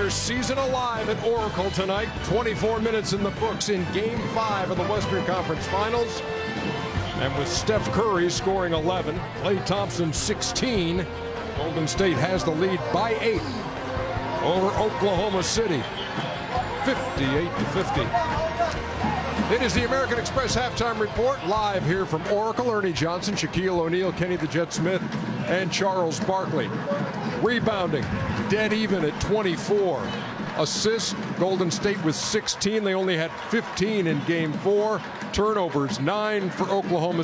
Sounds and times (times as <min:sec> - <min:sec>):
Speech: 0:00.0 - 0:06.2, 0:07.2 - 0:13.6, 0:14.4 - 0:15.9, 0:16.8 - 0:18.8, 0:19.5 - 0:26.8, 0:27.4 - 0:37.2
Music: 0:00.0 - 0:37.2.